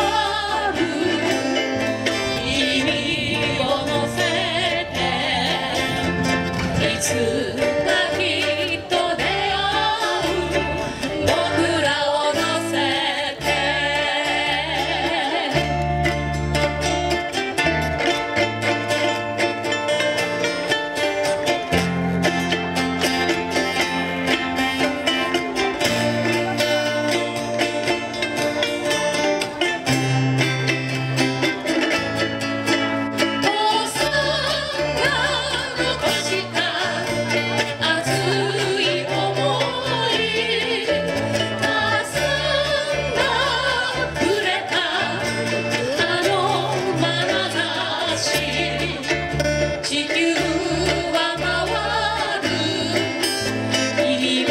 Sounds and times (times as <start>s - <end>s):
Bluegrass: 0.0s - 54.5s
Ukulele: 0.0s - 54.5s.